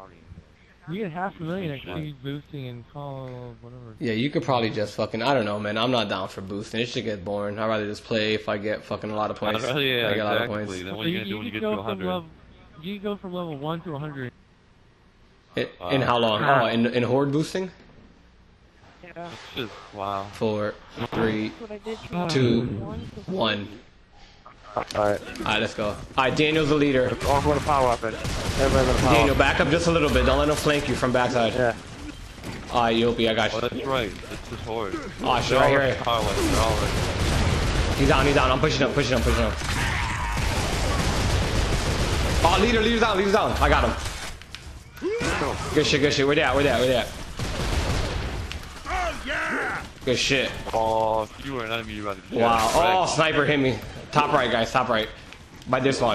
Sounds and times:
Speech: 0.0s - 14.3s, 24.5s - 31.8s, 32.7s - 36.9s, 48.9s - 55.1s.

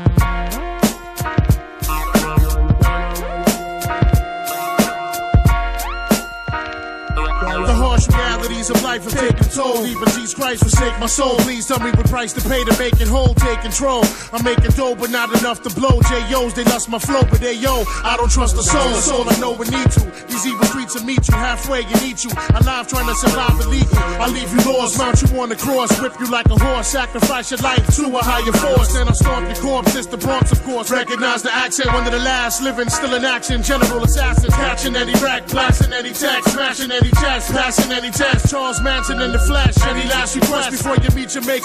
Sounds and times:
Hip hop music: 0.0s - 41.6s.

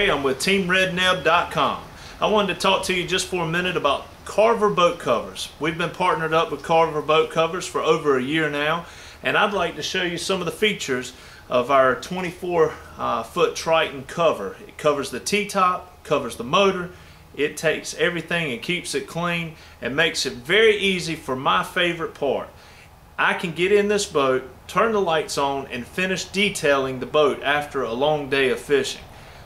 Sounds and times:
Speech: 0.0s - 22.6s, 23.2s - 29.1s.

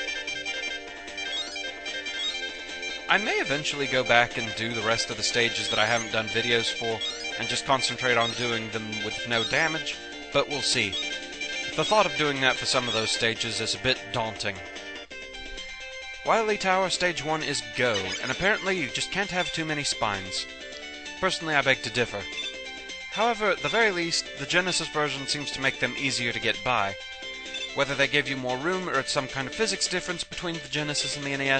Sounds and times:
Music: 0.0s - 31.5s
Speech: 3.1s - 11.0s, 11.8s - 14.6s, 16.3s - 20.5s, 21.2s - 22.3s, 23.2s - 27.0s, 27.8s - 31.5s.

